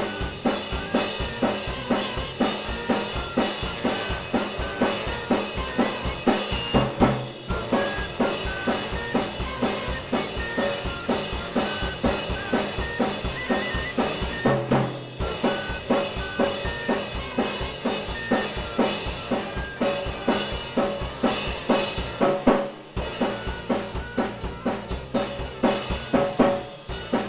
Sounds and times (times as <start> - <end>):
Bass drum: 0.0 - 27.2
Drum kit: 0.0 - 27.2
Rimshot: 0.0 - 27.2.